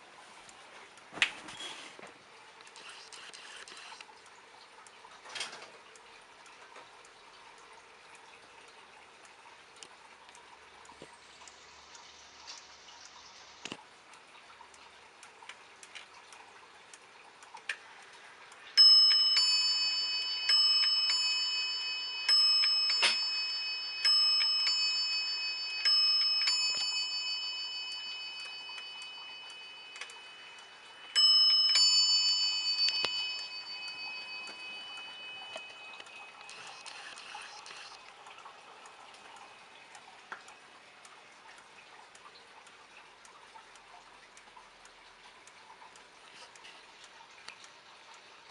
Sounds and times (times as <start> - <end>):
Tick-tock: 2.6 - 48.5
Bell: 18.8 - 38.0.